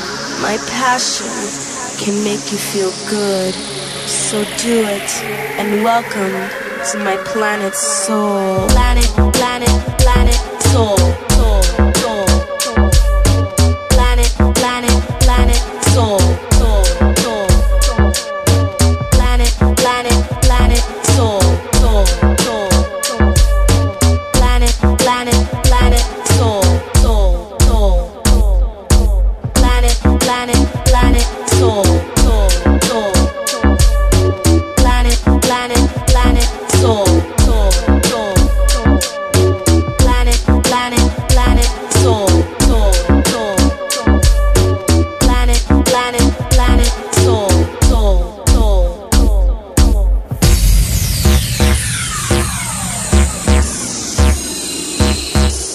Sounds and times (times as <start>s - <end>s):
Afrobeat: 2.6s - 55.7s.